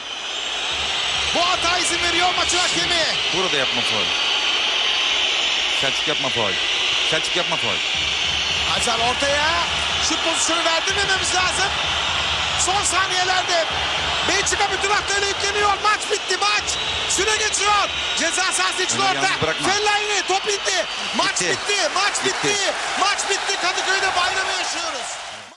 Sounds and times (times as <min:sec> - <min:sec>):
Speech: 0:01.4 - 0:04.1, 0:05.8 - 0:07.8, 0:08.7 - 0:11.7, 0:12.6 - 0:13.7, 0:14.3 - 0:25.2.